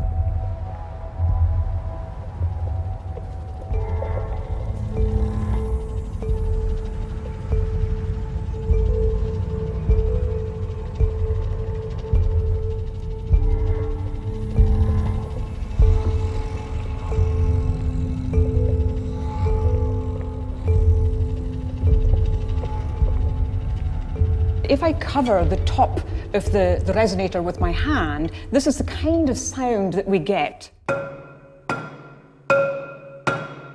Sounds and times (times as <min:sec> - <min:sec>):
Percussion: 0:00.0 - 0:33.7.